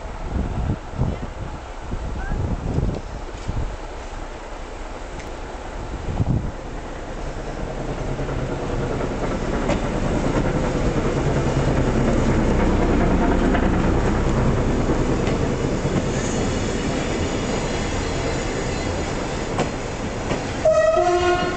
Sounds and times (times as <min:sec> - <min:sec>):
Railroad car, train wagon: 0:00.0 - 0:21.5
Train: 0:00.0 - 0:21.5.